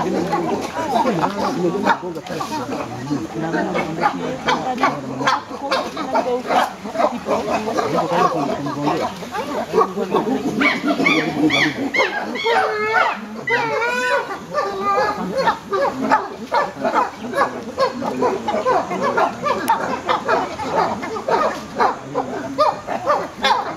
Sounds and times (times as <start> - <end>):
Speech: 0.0 - 23.7
Wild animals: 0.0 - 23.7.